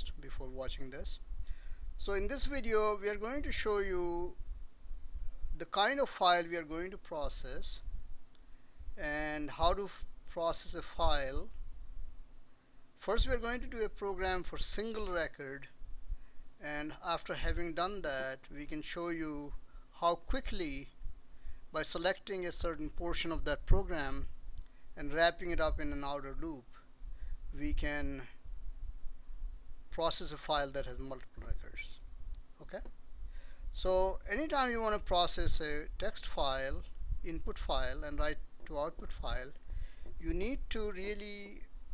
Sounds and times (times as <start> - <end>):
Speech: 0.0 - 1.2, 2.0 - 4.4, 5.6 - 7.8, 9.0 - 11.5, 13.0 - 15.7, 16.6 - 20.9, 21.8 - 24.3, 25.0 - 26.8, 27.6 - 28.4, 29.9 - 32.0, 32.6 - 32.9, 33.8 - 39.6, 40.2 - 41.7.